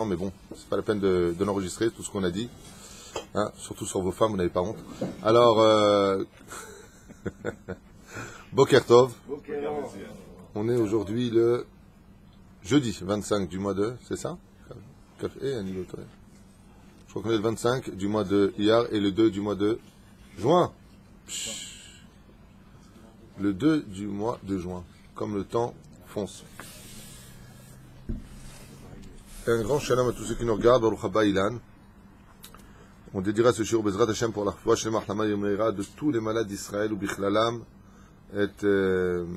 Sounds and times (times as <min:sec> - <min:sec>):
Speech: 0:00.0 - 0:02.6, 0:03.3 - 0:06.3, 0:08.6 - 0:11.7, 0:12.6 - 0:16.2, 0:17.1 - 0:19.8, 0:20.4 - 0:22.0, 0:22.9 - 0:27.0, 0:28.8 - 0:31.6, 0:33.1 - 0:37.7, 0:38.3 - 0:39.3.